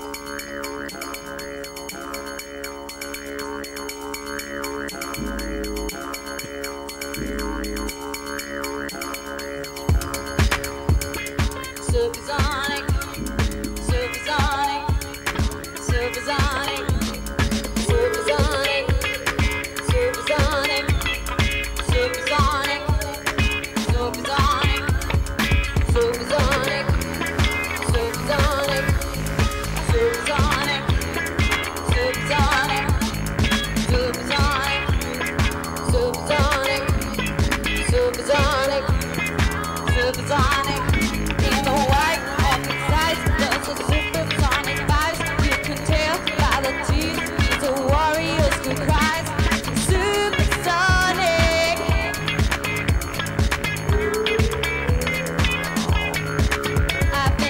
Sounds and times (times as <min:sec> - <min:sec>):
Electronica: 0:00.0 - 0:57.5.